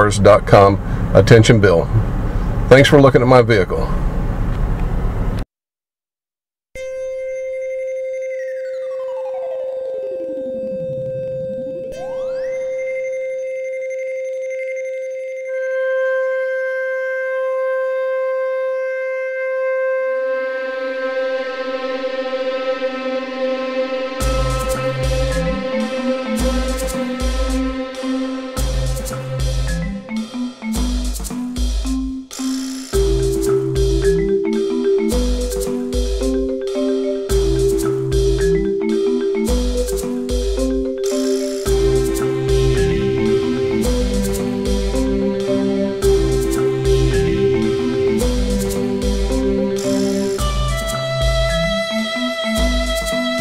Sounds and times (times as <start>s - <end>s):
Marimba, xylophone: 24.2s - 53.4s.